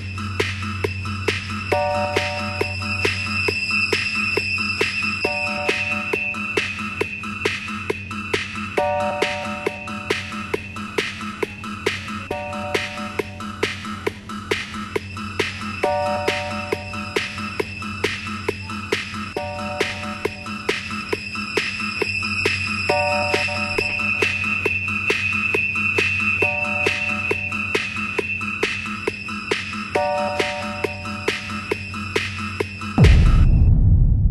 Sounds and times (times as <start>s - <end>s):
Electronica: 0.0s - 34.0s.